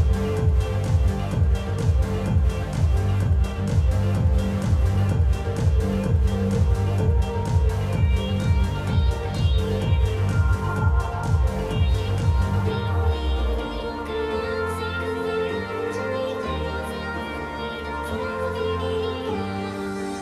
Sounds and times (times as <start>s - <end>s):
Dance music: 0.0s - 20.2s
Techno: 0.0s - 20.2s.